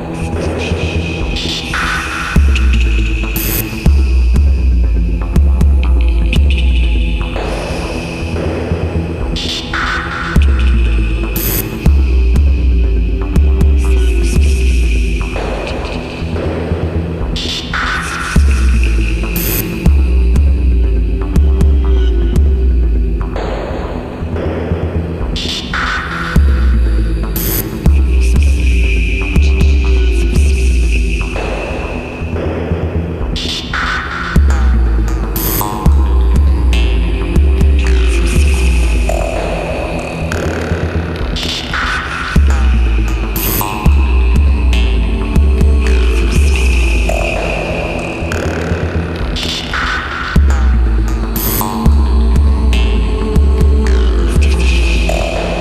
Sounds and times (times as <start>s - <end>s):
Music: 0.0s - 55.6s.